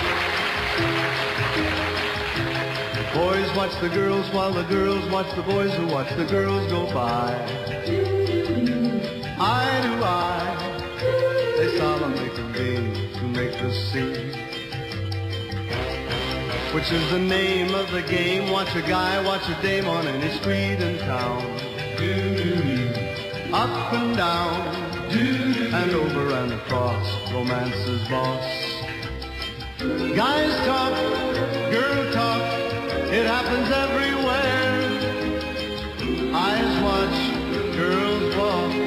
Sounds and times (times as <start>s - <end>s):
Music: 0.0s - 38.8s.